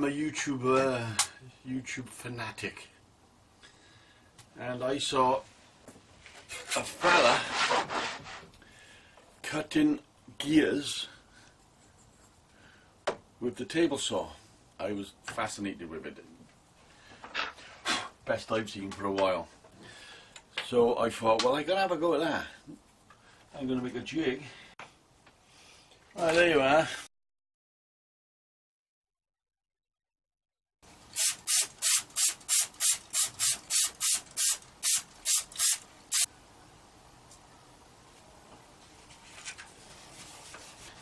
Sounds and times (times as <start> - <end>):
Speech: 0.0 - 3.0, 4.6 - 5.5, 6.7 - 7.5, 9.4 - 11.2, 13.4 - 16.4, 18.3 - 19.6, 20.6 - 22.6, 23.6 - 24.6, 26.2 - 27.1.